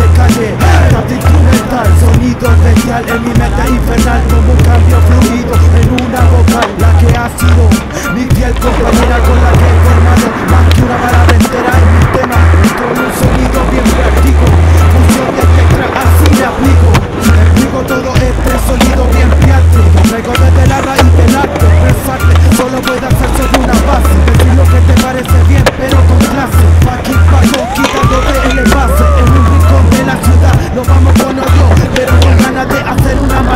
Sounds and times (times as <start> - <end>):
Music: 0.0 - 33.5
Skateboard: 0.0 - 33.5.